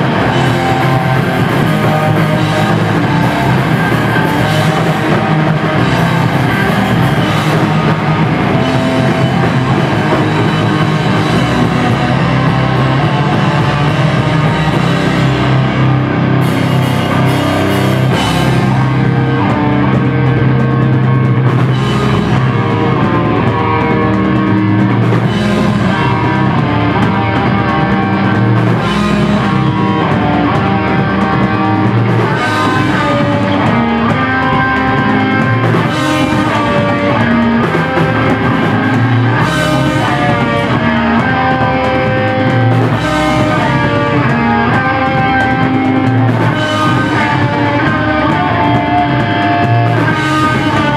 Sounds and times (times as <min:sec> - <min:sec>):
Drum: 0:00.0 - 0:50.9
Drum kit: 0:00.0 - 0:50.9
Guitar: 0:00.0 - 0:50.9
Rock music: 0:00.0 - 0:50.9.